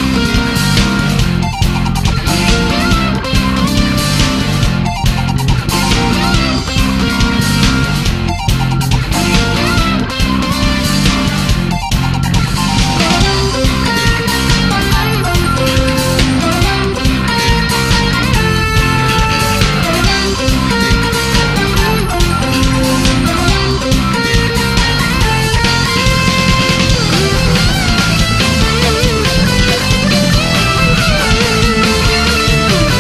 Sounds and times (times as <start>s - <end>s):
Music: 0.0s - 33.0s.